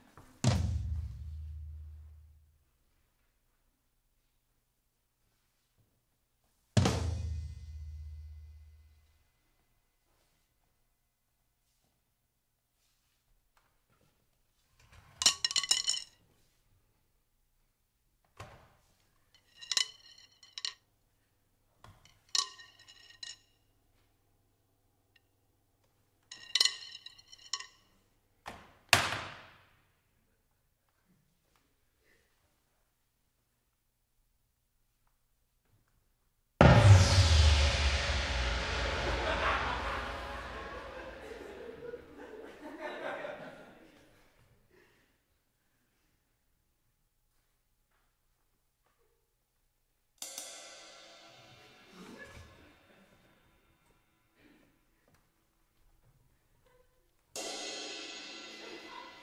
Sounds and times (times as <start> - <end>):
Drum kit: 0.4 - 2.2, 6.8 - 8.8, 36.6 - 42.2, 50.2 - 52.7, 57.4 - 59.2.